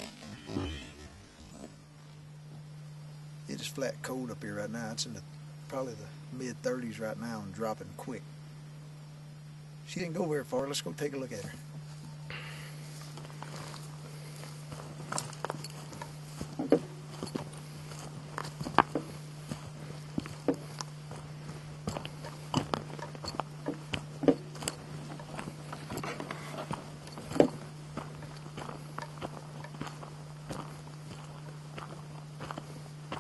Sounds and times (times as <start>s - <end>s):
Walk, footsteps: 12.9s - 33.2s.